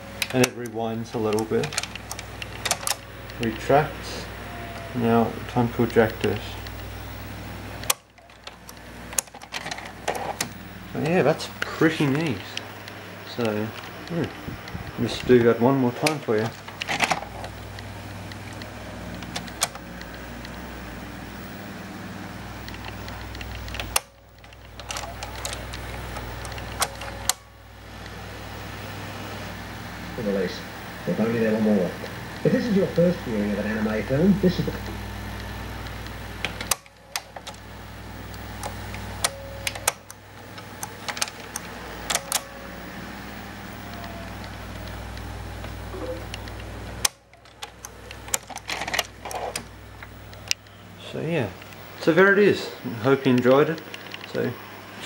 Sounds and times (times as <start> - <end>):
Speech: 0.3 - 1.8, 5.0 - 6.6, 10.9 - 12.6, 13.3 - 14.3, 15.0 - 16.5, 30.2 - 34.9, 51.0 - 55.0.